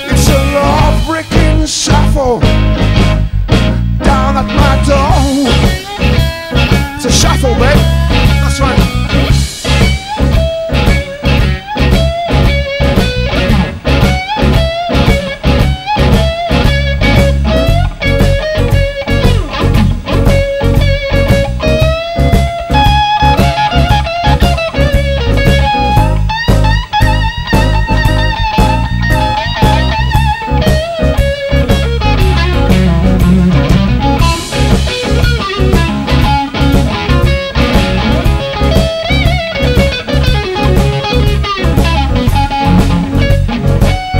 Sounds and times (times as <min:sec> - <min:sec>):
Bass guitar: 0:00.0 - 0:44.1
Drum: 0:00.0 - 0:44.1.